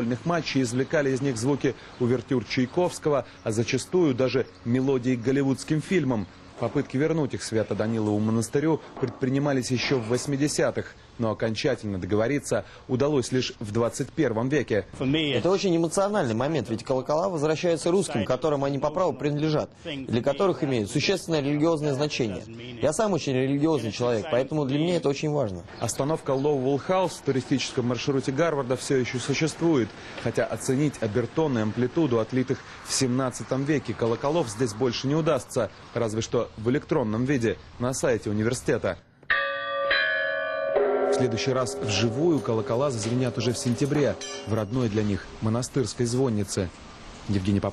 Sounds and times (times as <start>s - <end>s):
Speech: 0.0s - 39.0s, 41.1s - 46.7s, 47.3s - 47.7s
Bell: 39.3s - 45.1s.